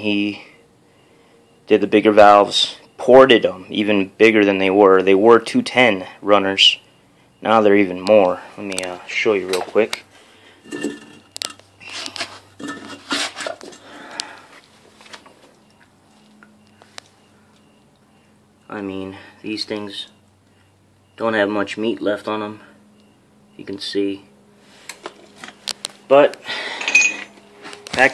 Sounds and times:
Speech: 0.0s - 0.5s, 1.7s - 6.8s, 7.4s - 10.0s, 18.7s - 20.2s, 21.2s - 22.7s, 23.6s - 24.3s, 27.9s - 28.1s.

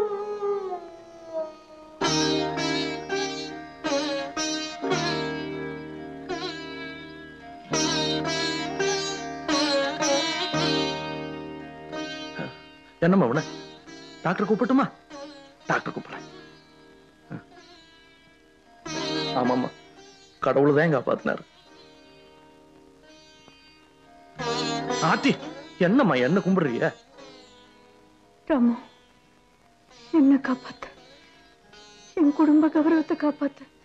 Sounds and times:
Sitar: 0.0s - 33.8s.

